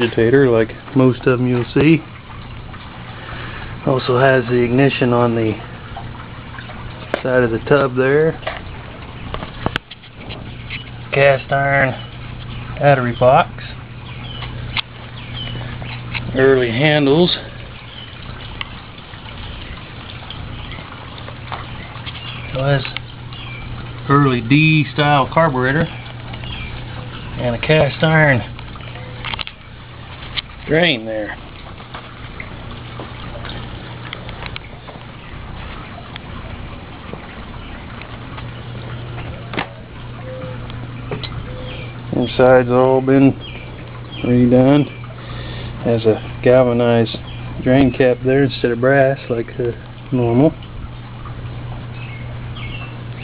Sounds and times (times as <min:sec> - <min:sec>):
Speech: 0:00.0 - 0:02.0, 0:03.8 - 0:05.6, 0:07.2 - 0:08.4, 0:11.1 - 0:12.0, 0:12.8 - 0:13.8, 0:16.3 - 0:17.5, 0:22.5 - 0:23.0, 0:24.1 - 0:26.0, 0:27.4 - 0:28.5, 0:30.7 - 0:31.4, 0:42.1 - 0:43.4, 0:44.2 - 0:45.0, 0:45.8 - 0:50.6.